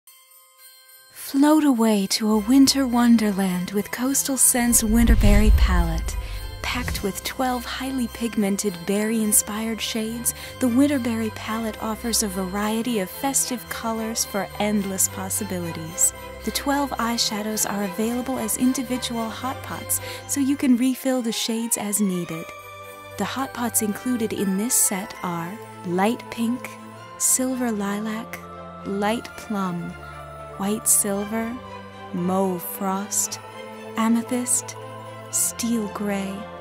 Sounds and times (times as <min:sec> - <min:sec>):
Jingle bell: 0:00.1 - 0:20.6.